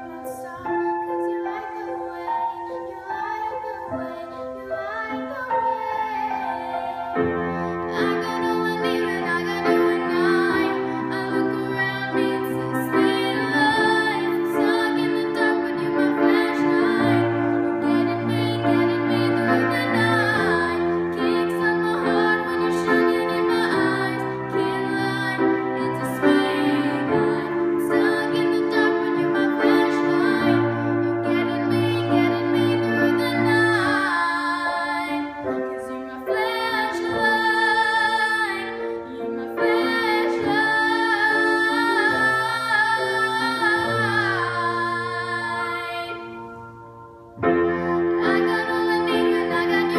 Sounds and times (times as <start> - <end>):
Classical music: 0.0 - 49.9
Piano: 0.0 - 49.9
Singing: 7.9 - 46.5.